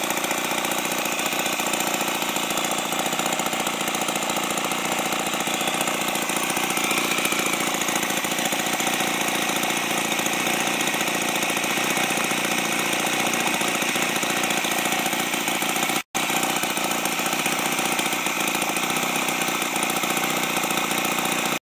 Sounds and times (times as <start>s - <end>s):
Idling: 0.0s - 21.6s
Medium engine (mid frequency): 0.0s - 21.6s.